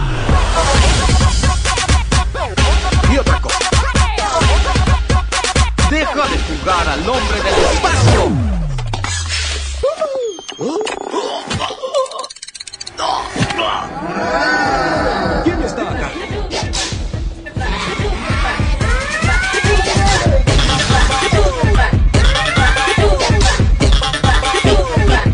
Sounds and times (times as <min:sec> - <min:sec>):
Music: 0:00.0 - 0:09.9, 0:14.6 - 0:25.3.